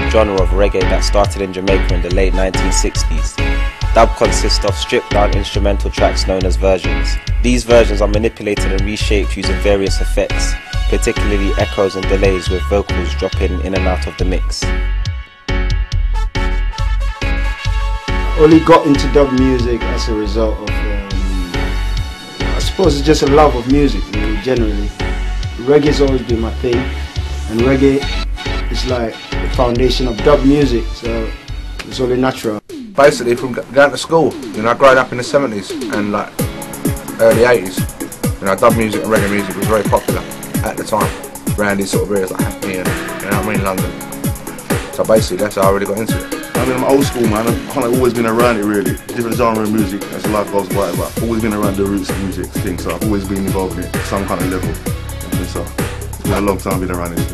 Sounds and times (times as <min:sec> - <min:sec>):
Speech: 0:00.0 - 0:14.7, 0:18.3 - 0:21.7, 0:22.5 - 0:25.0, 0:25.6 - 0:28.1, 0:28.7 - 0:36.4, 0:37.2 - 0:43.9, 0:45.0 - 0:55.7, 0:56.3 - 0:57.3
Music: 0:00.0 - 0:57.3.